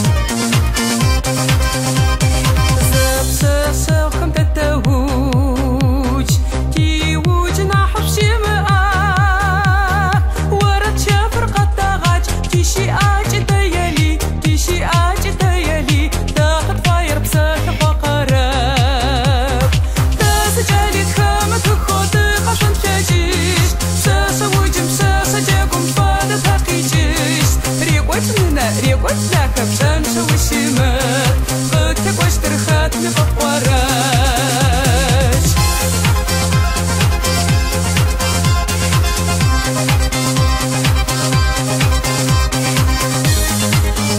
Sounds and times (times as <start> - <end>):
Techno: 0.0 - 44.1.